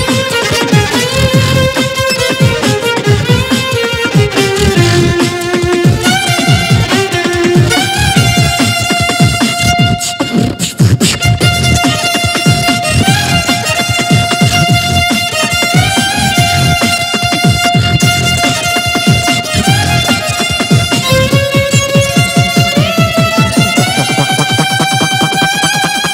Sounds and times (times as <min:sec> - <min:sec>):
Violin, fiddle: 0:00.0 - 0:26.1.